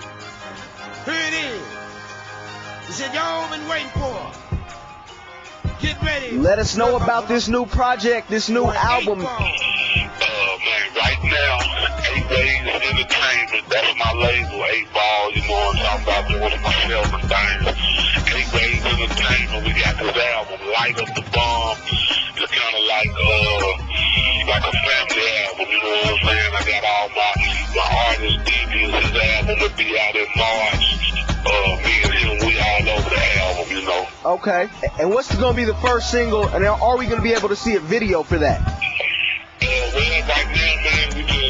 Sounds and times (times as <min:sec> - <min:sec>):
Music: 0:00.0 - 0:41.4
Speech: 0:05.8 - 0:09.6, 0:10.2 - 0:30.8, 0:31.5 - 0:38.6, 0:39.6 - 0:41.4
Radio: 0:08.0 - 0:35.1, 0:36.6 - 0:41.4.